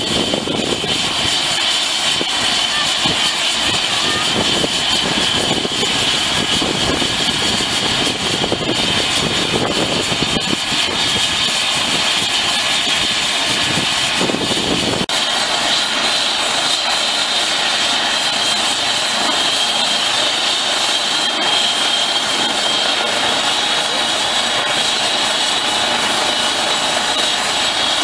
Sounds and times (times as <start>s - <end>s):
Helicopter: 0.0s - 28.0s.